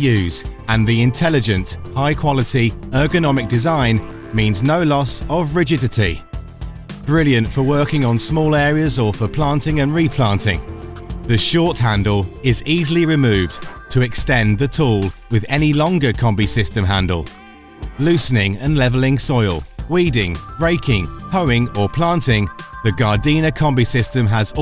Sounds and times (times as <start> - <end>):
Speech: 0.0 - 6.2, 7.1 - 10.7, 11.3 - 17.4, 18.0 - 24.6
Music: 0.0 - 24.6.